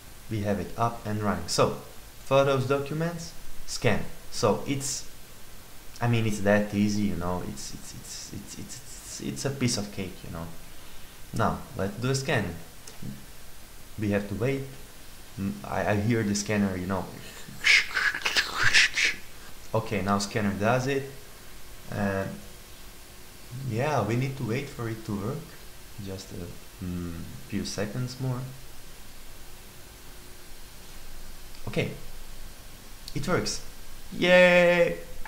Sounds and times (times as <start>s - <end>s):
Speech: 0.3s - 5.1s, 6.0s - 10.6s, 11.4s - 13.2s, 14.0s - 14.8s, 15.4s - 21.2s, 21.9s - 22.4s, 23.5s - 28.6s, 31.6s - 32.1s, 33.1s - 35.1s.